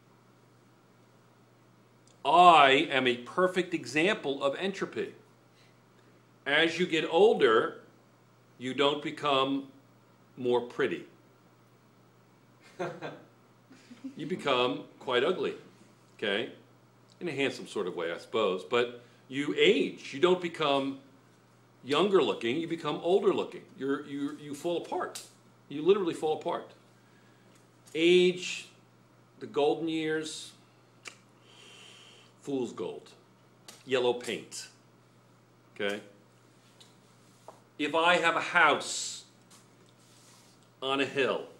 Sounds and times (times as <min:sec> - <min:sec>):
Inside, small room: 0:00.0 - 0:41.5
Speech: 0:02.2 - 0:05.2, 0:06.5 - 0:07.9, 0:08.6 - 0:09.8, 0:10.4 - 0:11.2, 0:14.2 - 0:16.6, 0:17.2 - 0:21.1, 0:21.8 - 0:26.8, 0:27.9 - 0:28.8, 0:29.4 - 0:30.6, 0:32.4 - 0:33.2, 0:33.8 - 0:34.8, 0:35.8 - 0:36.2, 0:37.8 - 0:39.4, 0:40.8 - 0:41.5.